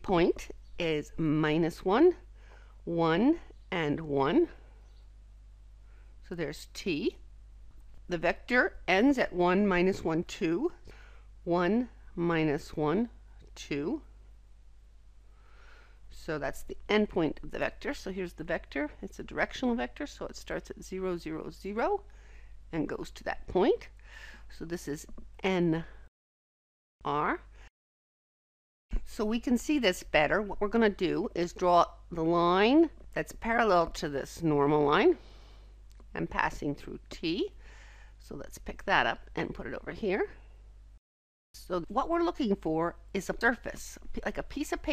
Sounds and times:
Speech: 0.0 - 2.2, 2.9 - 4.6, 6.3 - 7.2, 8.1 - 10.8, 11.5 - 14.1, 16.2 - 22.0, 22.7 - 23.9, 24.5 - 26.0, 27.1 - 27.5, 29.0 - 35.2, 36.1 - 37.6, 38.2 - 40.4, 41.6 - 44.9.

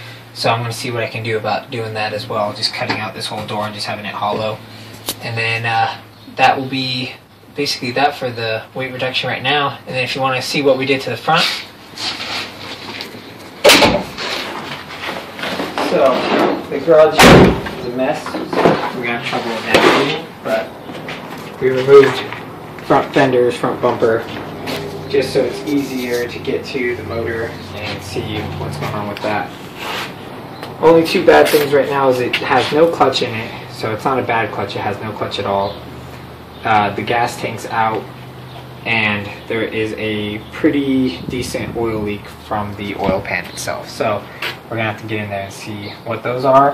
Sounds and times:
Vehicle: 0.0 - 46.7
Speech: 0.4 - 4.6, 5.2 - 11.7, 15.8 - 20.7, 21.6 - 24.3, 25.1 - 29.5, 30.8 - 35.8, 36.6 - 38.1, 38.8 - 46.7.

